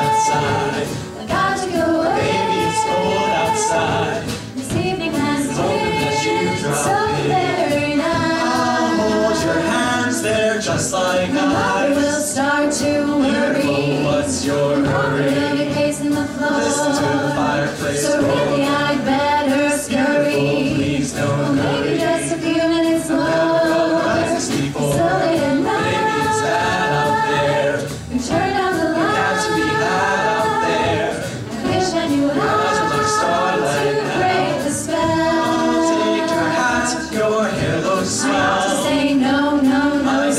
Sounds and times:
Music: 0:00.0 - 0:40.3.

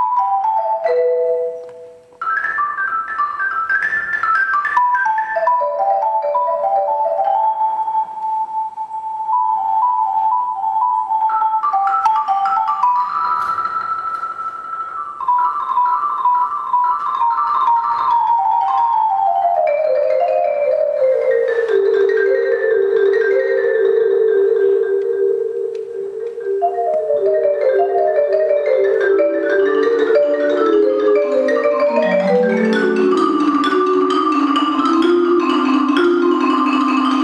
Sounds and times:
Glockenspiel: 0:00.0 - 0:37.2
Marimba, xylophone: 0:00.0 - 0:37.2.

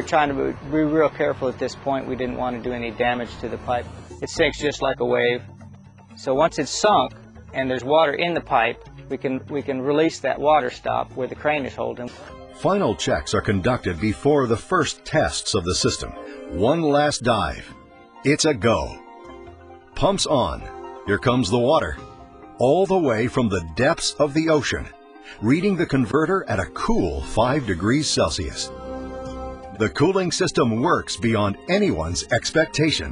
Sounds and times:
Speech: 0:00.0 - 0:05.4, 0:06.2 - 0:17.7, 0:18.3 - 0:19.0, 0:20.0 - 0:22.0, 0:22.6 - 0:28.7, 0:29.8 - 0:33.1
Music: 0:00.0 - 0:33.1.

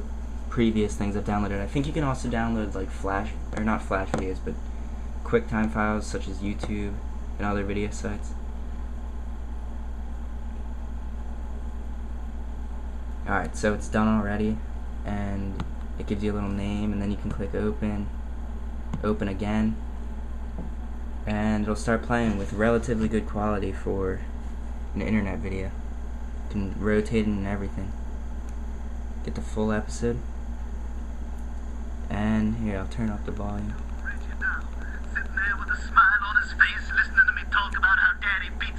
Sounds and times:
Speech: 0:00.0 - 0:04.6, 0:05.2 - 0:08.4, 0:13.2 - 0:18.1, 0:19.0 - 0:19.8, 0:21.3 - 0:24.3, 0:24.9 - 0:25.8, 0:26.5 - 0:28.0, 0:29.2 - 0:30.2, 0:32.1 - 0:38.7.

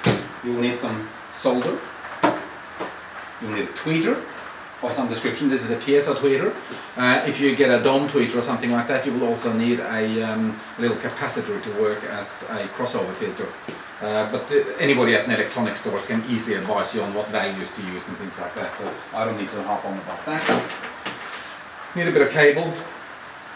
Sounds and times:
Speech: 0:00.4 - 0:01.9, 0:03.4 - 0:20.6, 0:21.9 - 0:23.0.

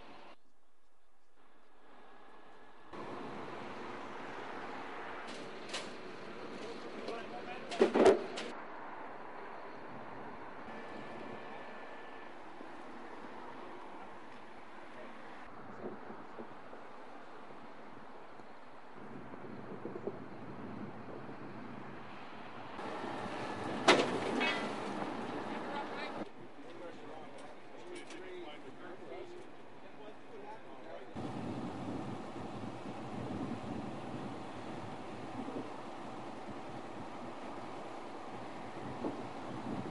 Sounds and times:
Vehicle: 0:00.0 - 0:00.5, 0:01.2 - 0:39.9
Speech: 0:06.6 - 0:08.0, 0:25.5 - 0:31.2.

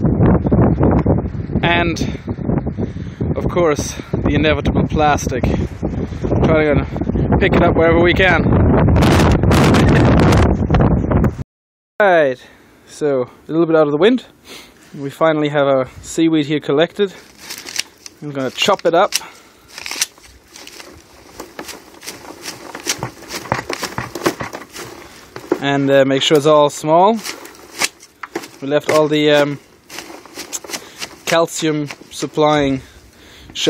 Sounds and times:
Speech: 0:01.6 - 0:02.2, 0:03.4 - 0:05.7, 0:06.4 - 0:08.5, 0:12.0 - 0:14.3, 0:15.0 - 0:17.2, 0:18.2 - 0:19.2, 0:25.6 - 0:27.3, 0:28.6 - 0:29.6, 0:31.2 - 0:32.9.

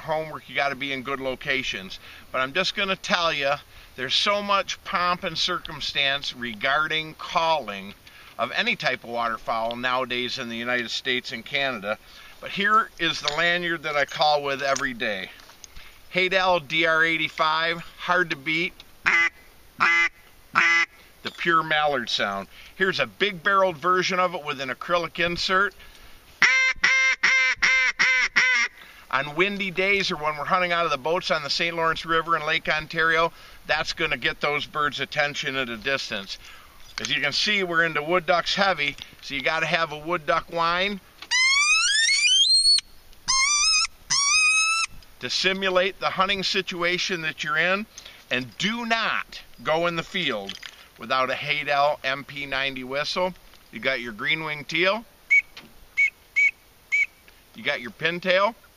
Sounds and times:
Speech: 0:00.0 - 0:15.4, 0:16.1 - 0:18.8, 0:21.3 - 0:25.8, 0:29.1 - 0:36.4, 0:37.0 - 0:41.0, 0:45.2 - 0:55.1, 0:57.6 - 0:58.6
Quack: 0:19.1 - 0:20.9, 0:26.4 - 0:28.7.

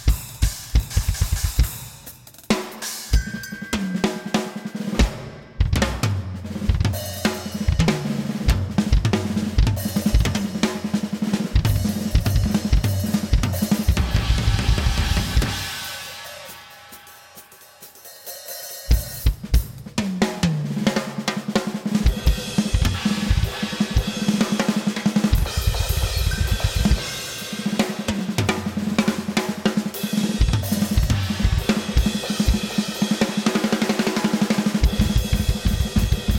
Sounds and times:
Bass drum: 0:00.0 - 0:02.0, 0:05.0 - 0:15.8, 0:22.0 - 0:24.1, 0:25.2 - 0:27.2, 0:30.3 - 0:32.8, 0:34.8 - 0:36.3
Drum kit: 0:00.0 - 0:36.3.

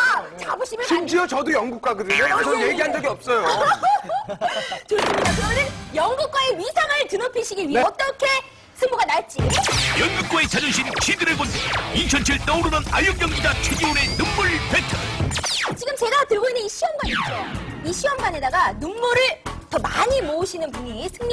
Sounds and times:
Music: 0:05.2 - 0:06.4, 0:09.4 - 0:15.8, 0:17.0 - 0:21.3.

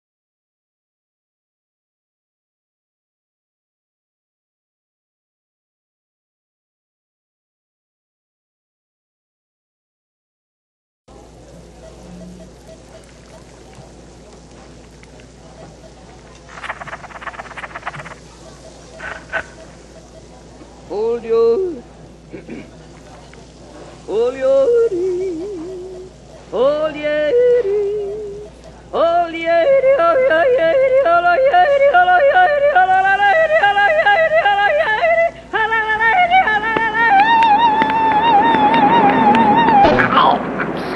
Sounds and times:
Male singing: 0:20.9 - 0:21.9, 0:24.1 - 0:40.0.

